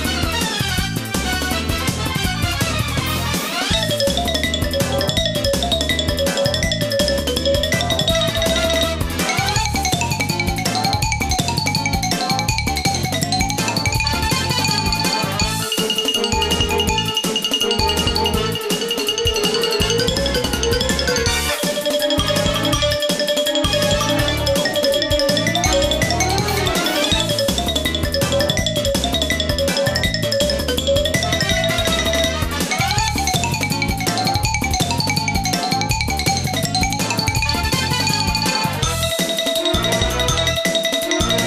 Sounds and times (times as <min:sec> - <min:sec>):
Marimba, xylophone: 0:03.3 - 0:41.4
Glockenspiel: 0:03.6 - 0:41.4.